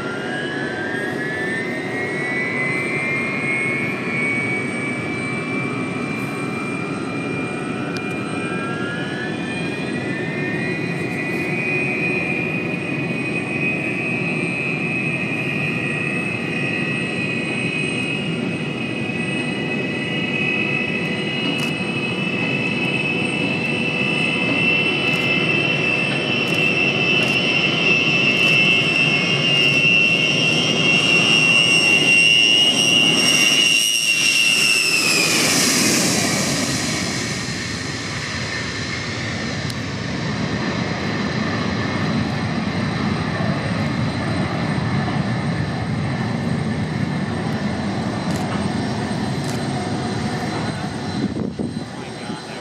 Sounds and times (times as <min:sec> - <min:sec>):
Fixed-wing aircraft, airplane: 0:00.0 - 0:52.6
Jet engine: 0:00.0 - 0:52.6.